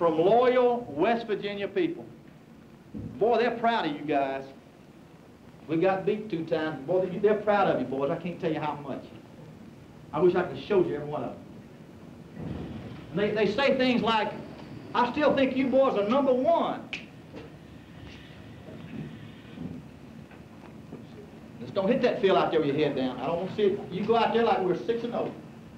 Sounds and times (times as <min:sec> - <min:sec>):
Male speech, man speaking: 0:00.0 - 0:02.2, 0:03.2 - 0:04.6, 0:05.7 - 0:09.2, 0:10.1 - 0:11.5, 0:13.2 - 0:14.4, 0:15.0 - 0:17.0, 0:21.6 - 0:25.4
Narration, monologue: 0:00.0 - 0:18.1, 0:18.7 - 0:25.7.